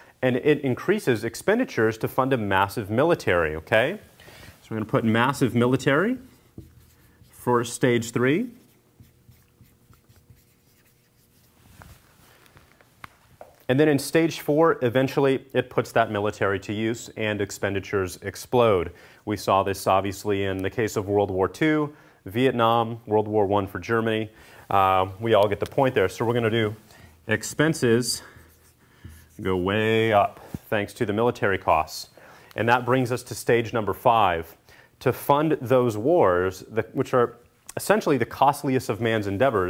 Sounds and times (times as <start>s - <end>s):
Inside, small room: 0.0s - 39.6s
Speech: 0.2s - 6.3s, 7.4s - 8.6s, 13.7s - 28.3s, 29.4s - 39.6s.